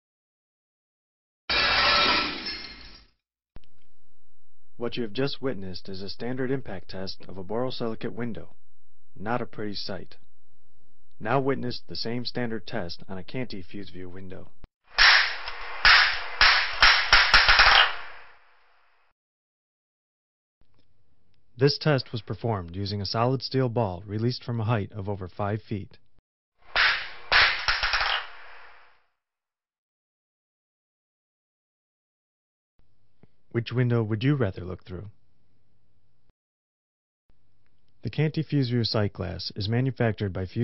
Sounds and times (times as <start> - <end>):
Speech: 4.8 - 8.6, 9.2 - 10.2, 11.2 - 14.6, 21.6 - 26.0, 33.5 - 35.2, 38.0 - 40.6.